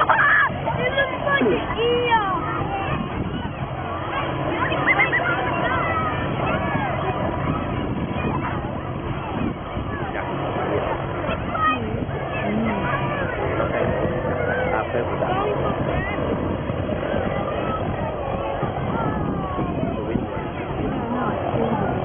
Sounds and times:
Hubbub, speech noise, speech babble: 0.0 - 22.0
Outside, rural or natural: 0.0 - 22.0
Speech: 4.0 - 22.0.

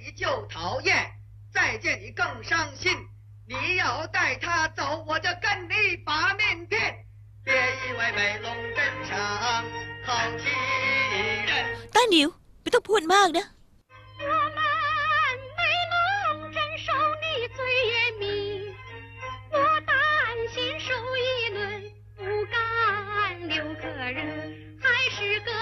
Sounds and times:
Speech: 0.0 - 7.0, 11.8 - 13.5
Music: 7.5 - 11.8, 13.9 - 25.6.

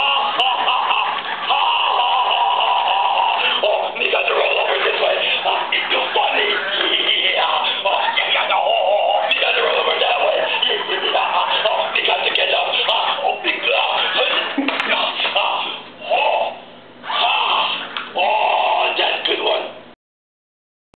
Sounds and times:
Male speech, man speaking: 3.5 - 16.6, 17.4 - 19.8.

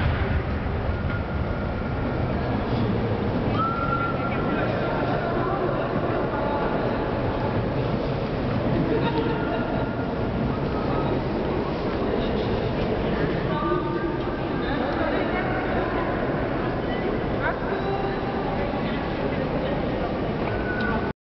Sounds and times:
Speech: 3.6 - 7.6, 8.7 - 21.1.

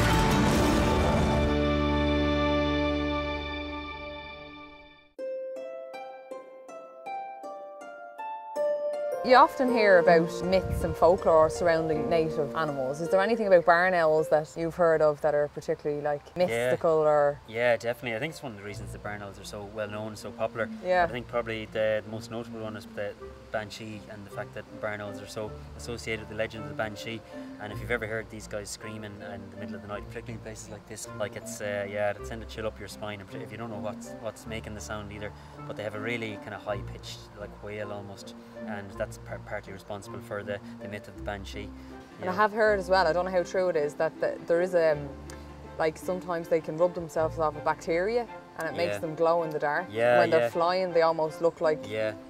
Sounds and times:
Music: 0.0 - 52.3.

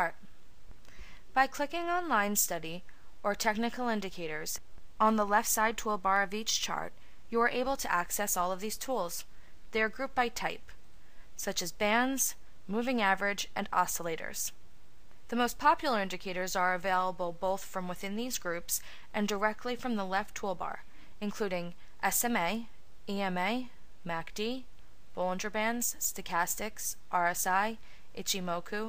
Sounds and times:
Speech: 1.4 - 10.7, 11.4 - 14.6, 15.3 - 28.8.

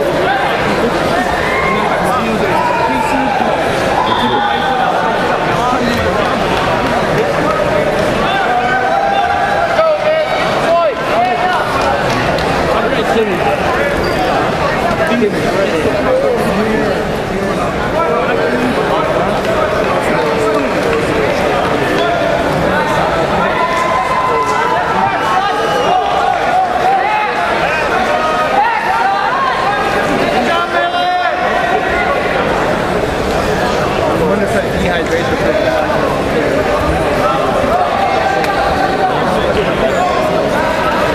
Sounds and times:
Speech: 0.0 - 41.1.

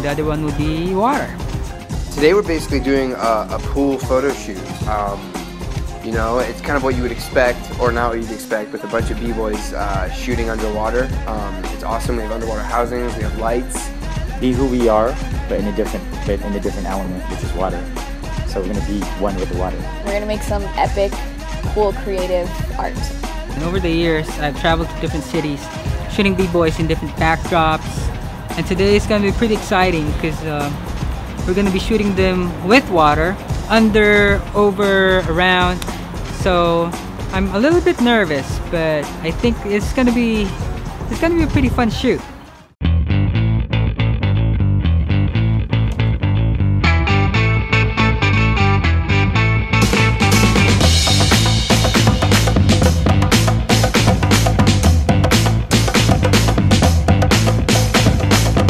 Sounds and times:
Music: 0.0 - 58.6.

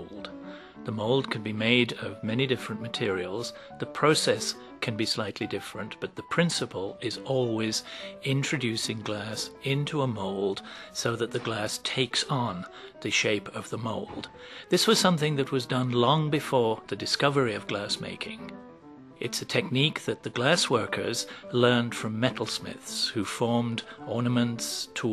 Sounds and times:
Speech: 0.0 - 18.5, 19.2 - 25.1
Music: 0.0 - 25.1.

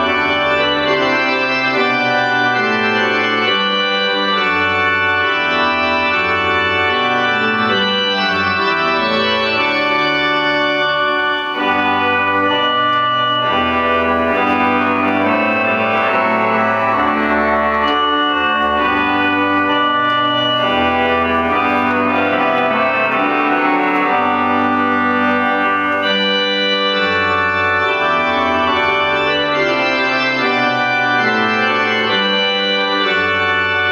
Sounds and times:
Musical instrument: 0.0 - 33.9.

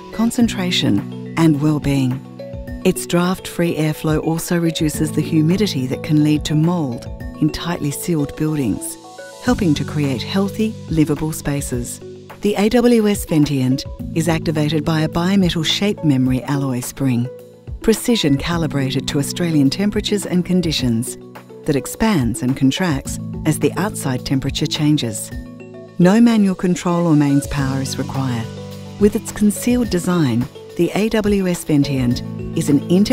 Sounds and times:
Music: 0.0 - 33.1
Speech: 0.2 - 2.2, 2.9 - 25.3, 26.0 - 33.1.

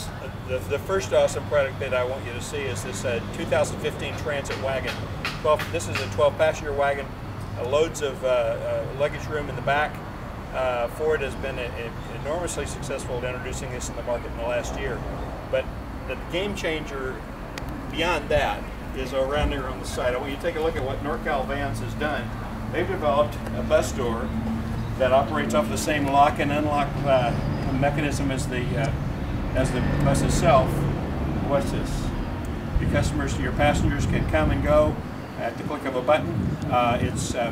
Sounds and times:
Speech: 0.0 - 10.0, 10.6 - 17.2, 17.9 - 24.3, 25.0 - 29.0, 29.6 - 32.1, 32.8 - 37.5.

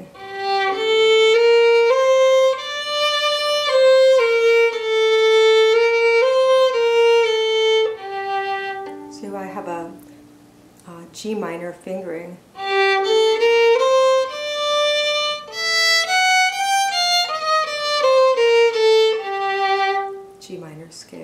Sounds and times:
Violin, fiddle: 0.0 - 9.1, 12.6 - 20.3
Speech: 9.1 - 10.0, 10.8 - 12.4, 20.4 - 21.2.

